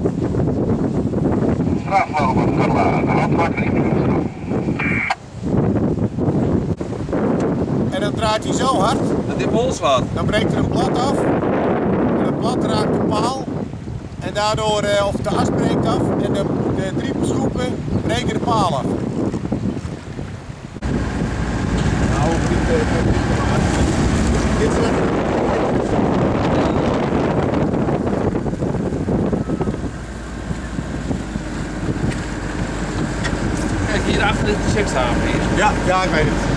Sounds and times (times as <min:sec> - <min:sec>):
Motorboat, speedboat: 0:00.0 - 0:36.5
Wind noise (microphone): 0:00.0 - 0:36.5.